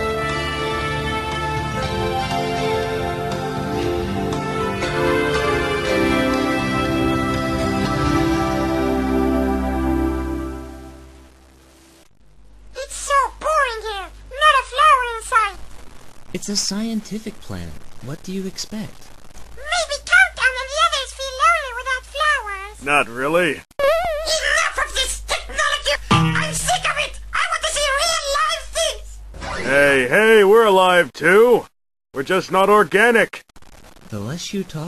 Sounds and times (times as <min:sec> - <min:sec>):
Speech: 0:24.3 - 0:33.4, 0:34.1 - 0:34.8.